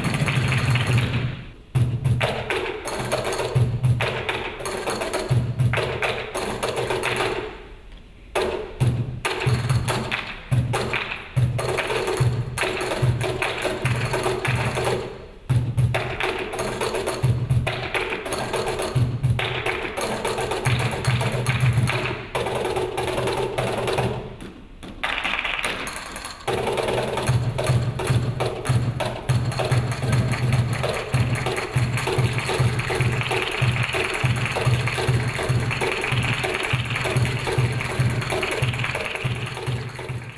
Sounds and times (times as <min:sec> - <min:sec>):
Flamenco: 0:00.0 - 0:07.7, 0:08.3 - 0:40.3.